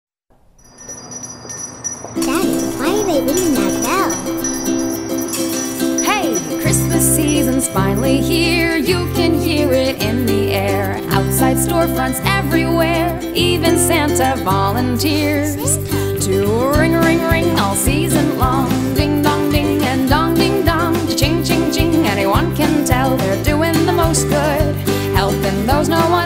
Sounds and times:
Christmas music: 0.6s - 26.2s
Speech: 2.2s - 4.3s, 6.0s - 6.5s
Christian music: 2.2s - 26.2s.

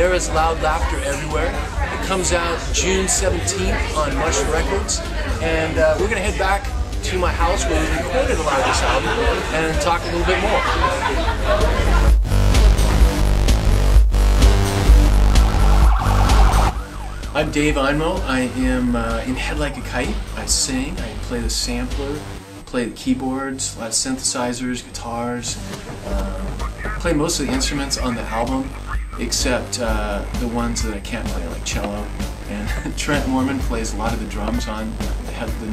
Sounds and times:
Speech: 0.0s - 11.9s, 17.4s - 35.7s
Music: 0.0s - 35.7s.

